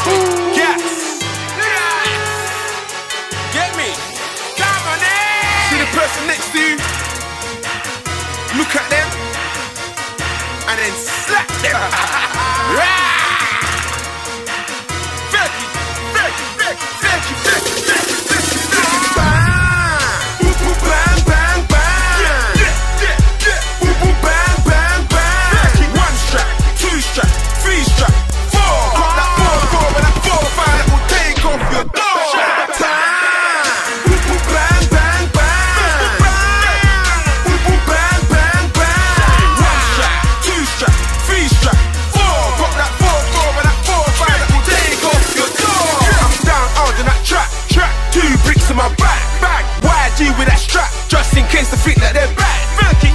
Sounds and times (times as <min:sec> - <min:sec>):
Music: 0:00.0 - 0:53.1.